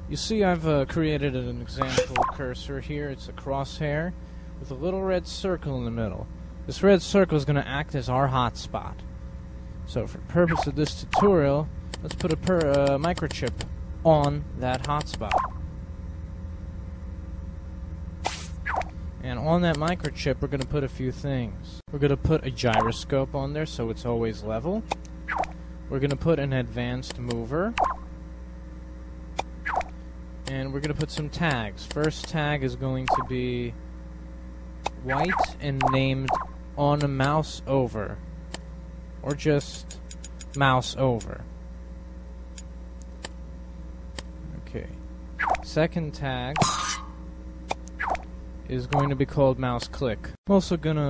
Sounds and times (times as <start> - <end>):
Speech: 0.1 - 9.1, 9.9 - 15.4, 19.2 - 24.9, 25.9 - 27.8, 30.5 - 33.8, 35.0 - 38.2, 39.2 - 39.9, 40.6 - 41.5, 44.4 - 45.0, 45.6 - 46.7, 48.7 - 51.1.